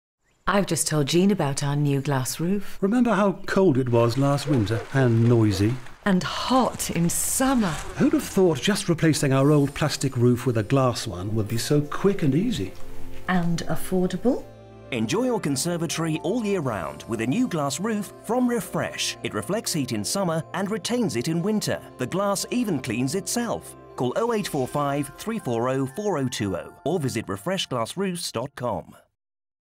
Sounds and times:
Speech: 0:00.5 - 0:12.7, 0:13.3 - 0:29.1
Music: 0:06.8 - 0:29.0.

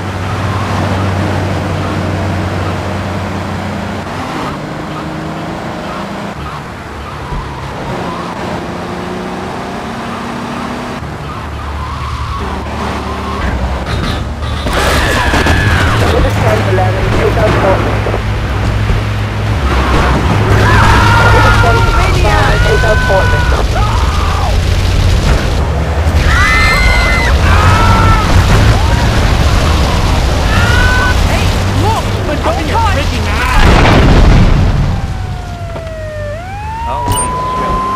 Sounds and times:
Car: 0:00.0 - 0:37.9.

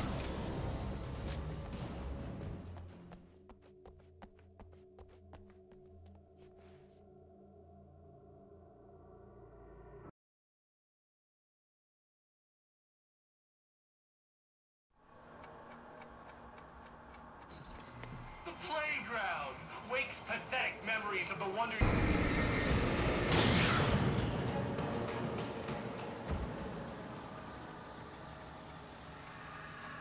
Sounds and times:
Music: 0:00.0 - 0:10.1, 0:21.8 - 0:30.0
Speech: 0:18.4 - 0:21.8.

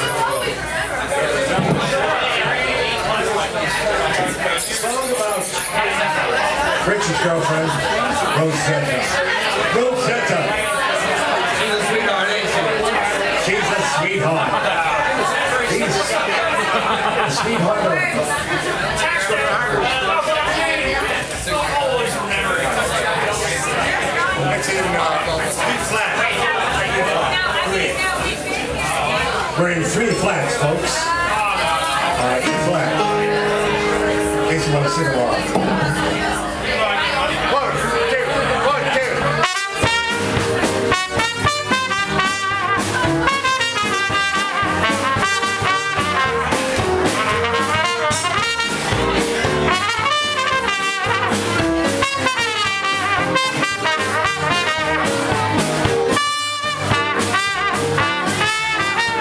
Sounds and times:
Speech: 0:00.0 - 0:59.2.

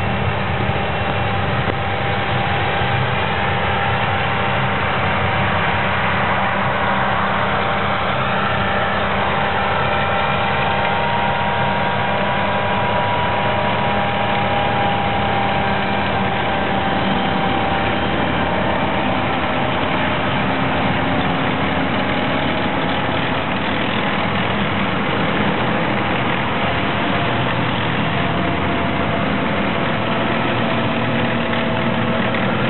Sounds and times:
Truck: 0:00.0 - 0:32.7.

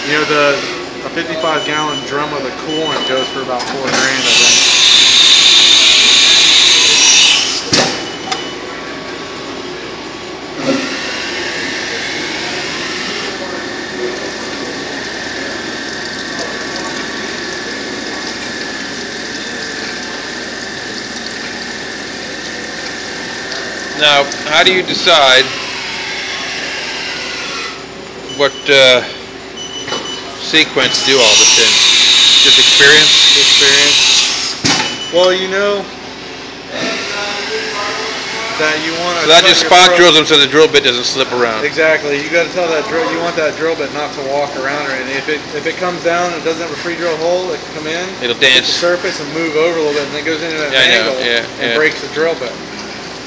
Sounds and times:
Speech: 0:00.0 - 0:04.5, 0:24.0 - 0:25.5, 0:30.4 - 0:31.7, 0:32.5 - 0:34.0, 0:36.7 - 0:52.6.

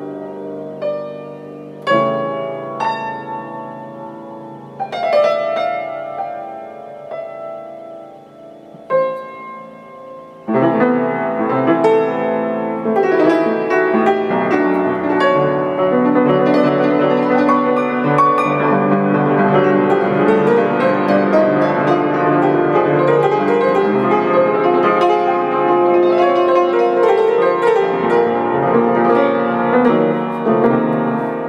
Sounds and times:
Piano: 0:00.0 - 0:31.4.

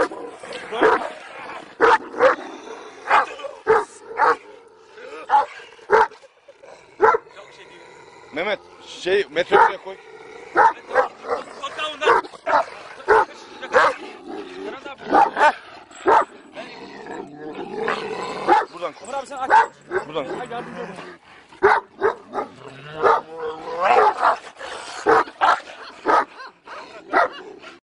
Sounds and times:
Speech: 0:00.5 - 0:01.2, 0:07.4 - 0:10.0, 0:13.2 - 0:15.2, 0:18.6 - 0:21.2
Bow-wow: 0:01.8 - 0:02.4, 0:03.1 - 0:04.4, 0:05.3 - 0:06.2, 0:07.0 - 0:07.2, 0:09.5 - 0:09.8, 0:15.1 - 0:16.3, 0:18.5 - 0:18.7, 0:21.6 - 0:24.4, 0:25.1 - 0:27.4.

